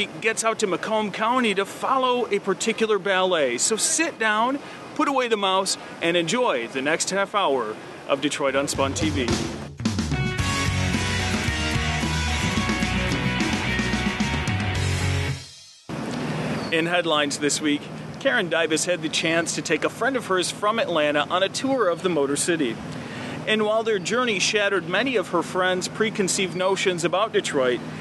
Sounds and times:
Speech: 0.0 - 9.4, 16.7 - 22.8, 23.5 - 27.8
Music: 8.8 - 15.9.

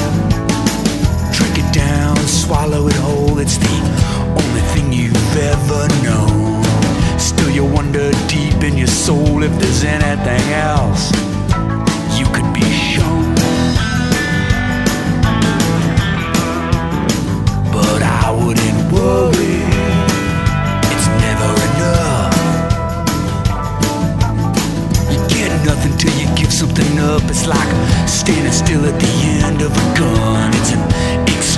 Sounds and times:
Music: 0.0 - 31.5.

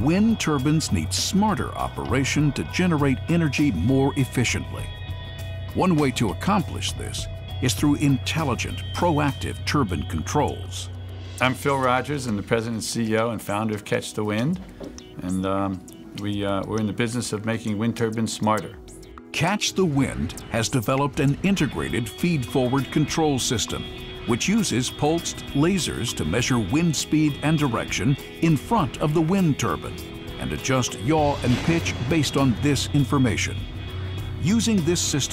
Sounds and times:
Speech: 0.0 - 4.9, 5.8 - 14.6, 15.2 - 33.6, 34.4 - 35.3
Music: 0.0 - 35.3.

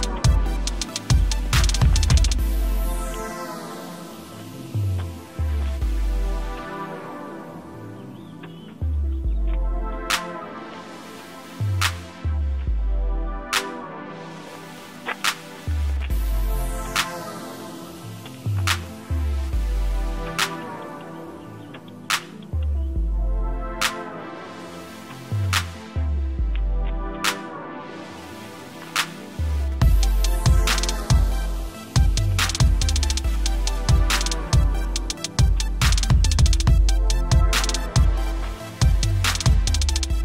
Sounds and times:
Outside, rural or natural: 0.0 - 40.2.

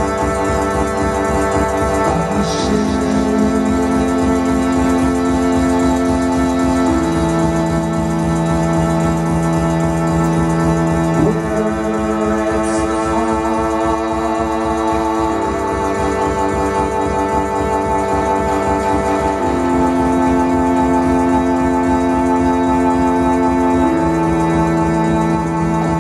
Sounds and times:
Music: 0.0 - 26.0.

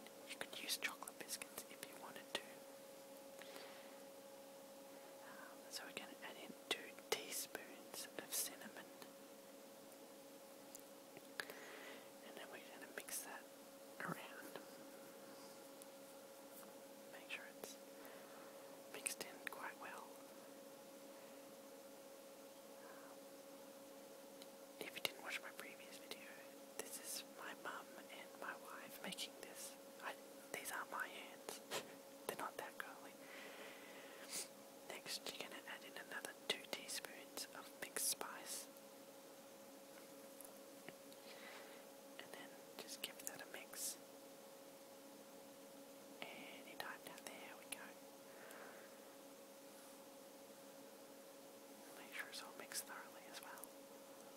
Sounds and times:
Whispering: 0.3 - 2.6, 5.2 - 9.1, 12.2 - 13.4, 14.0 - 14.8, 17.1 - 17.8, 18.9 - 20.2, 24.8 - 33.2, 34.2 - 38.7, 42.2 - 44.0, 46.2 - 48.0, 51.8 - 53.7.

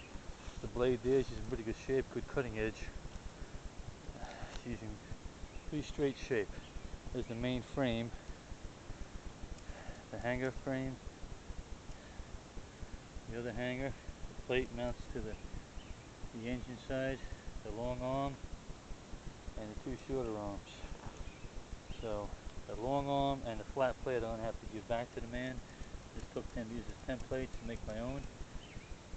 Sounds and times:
Speech: 0.6 - 3.0, 4.2 - 5.0, 5.7 - 8.2, 10.1 - 11.0, 13.3 - 15.4, 16.4 - 18.4, 19.6 - 21.1, 22.0 - 25.6, 26.2 - 28.3.

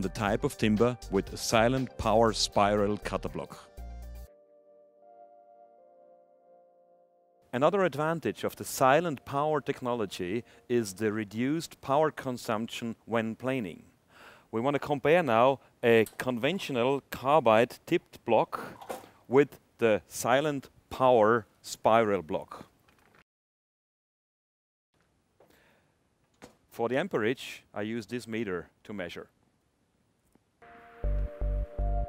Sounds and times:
Speech: 0.0 - 3.7, 7.6 - 13.9, 14.5 - 18.7, 19.3 - 22.7, 26.8 - 29.4.

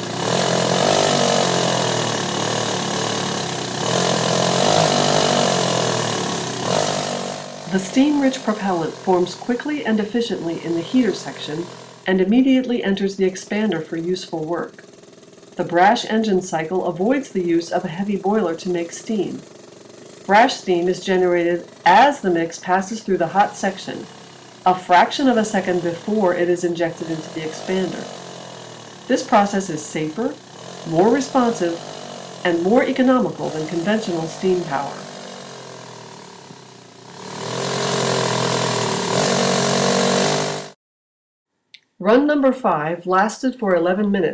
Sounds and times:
Engine: 0.0 - 40.8
Outside, urban or manmade: 0.0 - 40.8
Speech: 7.7 - 14.8, 15.6 - 19.4, 20.3 - 24.1, 24.7 - 28.1, 29.1 - 31.8, 32.5 - 35.0, 42.0 - 44.3.

